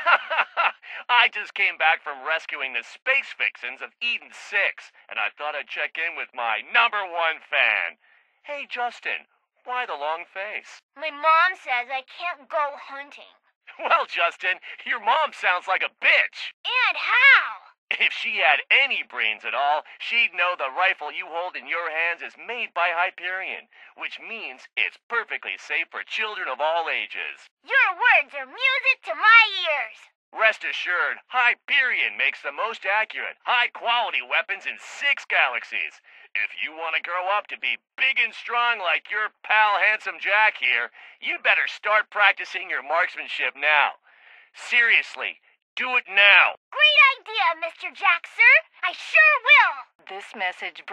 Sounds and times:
Speech: 0.0 - 50.9.

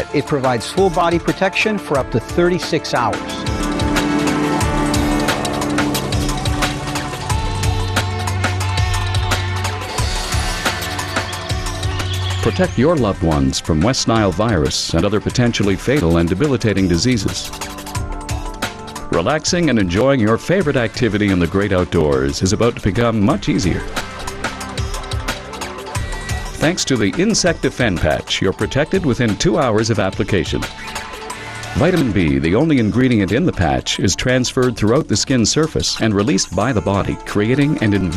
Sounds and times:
Speech: 0.0 - 3.4, 12.4 - 17.5, 19.1 - 23.9, 26.6 - 30.7, 31.8 - 38.1
Music: 0.0 - 38.1.

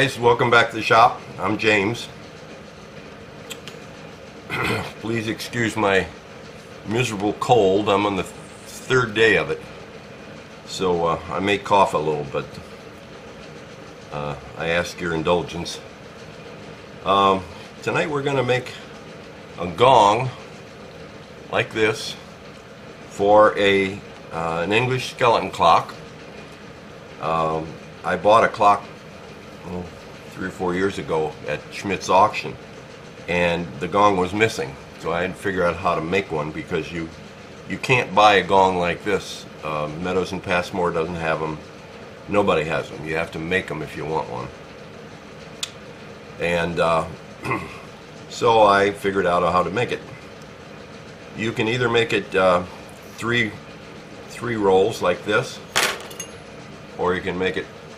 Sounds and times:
Speech: 0.0 - 2.2, 4.6 - 6.2, 6.8 - 9.7, 10.7 - 12.6, 14.1 - 15.9, 17.0 - 18.9, 19.6 - 20.4, 21.5 - 22.3, 23.1 - 26.0, 27.2 - 28.9, 29.6 - 32.6, 33.2 - 41.6, 42.3 - 44.6, 46.4 - 47.7, 48.3 - 50.2, 51.4 - 53.7, 54.3 - 55.7, 57.0 - 57.8.

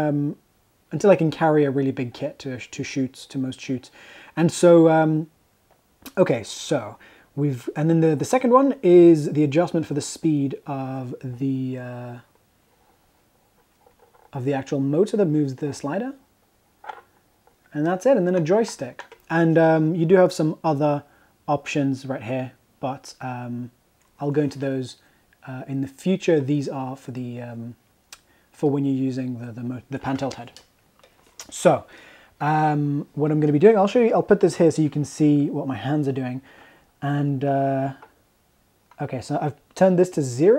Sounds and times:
Speech: 0.0 - 5.3, 6.1 - 12.3, 14.4 - 16.2, 17.7 - 27.8, 28.6 - 30.6, 31.4 - 38.1, 39.0 - 40.5.

